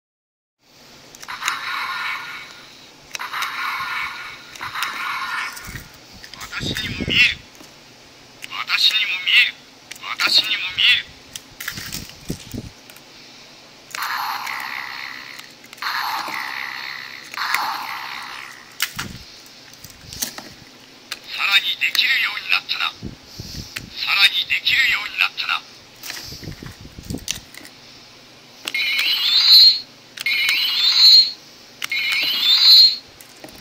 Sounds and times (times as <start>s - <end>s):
Speech: 6.4s - 7.4s, 8.4s - 11.1s, 21.3s - 23.0s, 23.9s - 25.7s.